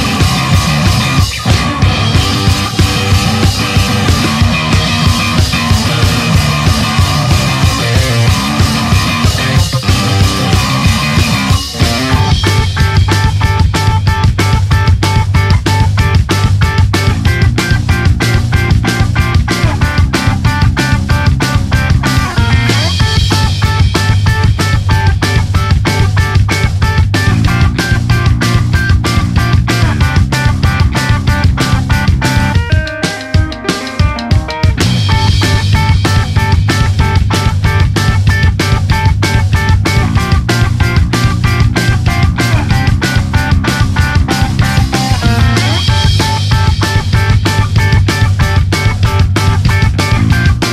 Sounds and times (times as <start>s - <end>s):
Music: 0.0s - 50.7s.